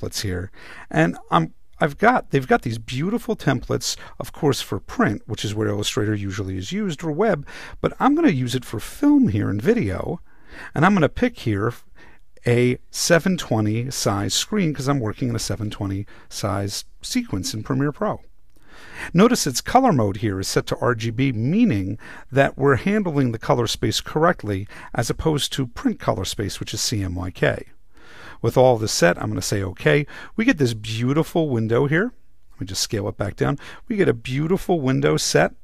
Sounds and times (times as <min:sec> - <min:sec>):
Narration, monologue: 0:00.0 - 0:35.6.